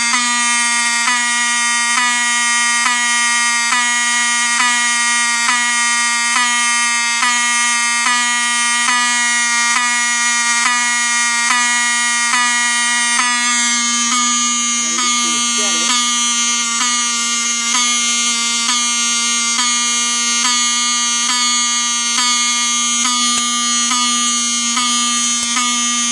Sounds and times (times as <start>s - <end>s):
Fire alarm: 0.0s - 26.1s.